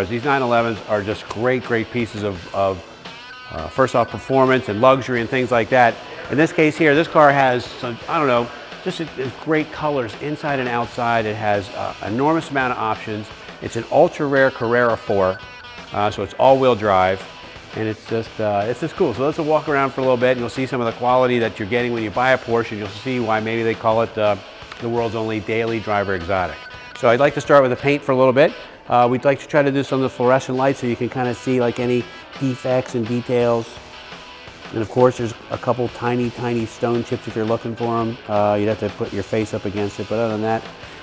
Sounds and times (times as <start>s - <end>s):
Speech: 0.0s - 2.8s, 3.5s - 17.2s, 17.8s - 33.8s, 34.7s - 40.7s
Music: 0.0s - 41.0s.